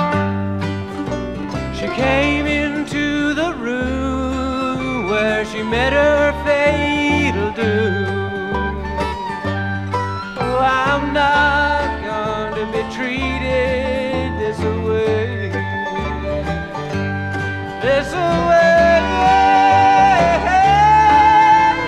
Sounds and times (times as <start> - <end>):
Country: 0.0 - 21.8.